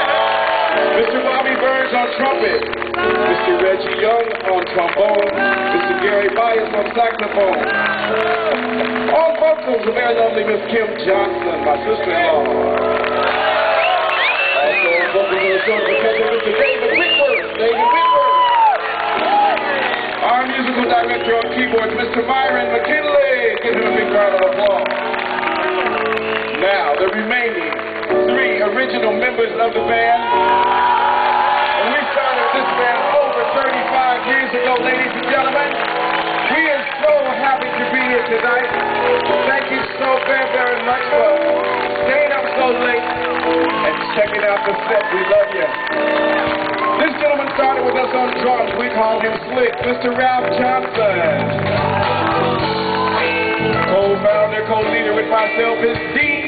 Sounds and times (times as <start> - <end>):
Music: 0.0 - 56.4.